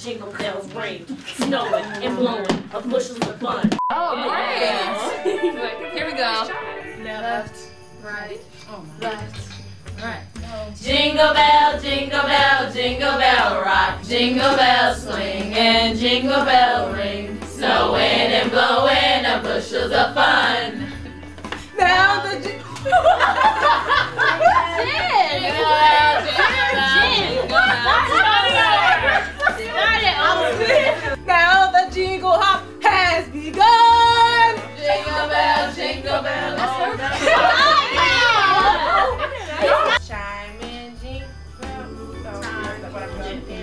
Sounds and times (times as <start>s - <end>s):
Music: 0.0s - 43.6s.